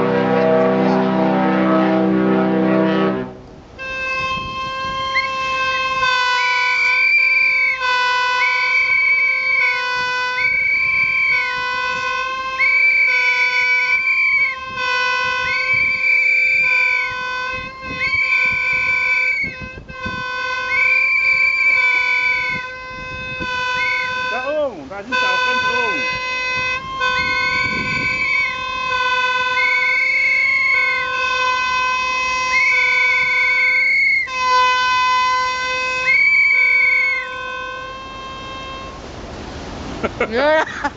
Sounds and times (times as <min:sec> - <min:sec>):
Speech: 0:24.3 - 0:26.0, 0:40.3 - 0:40.7.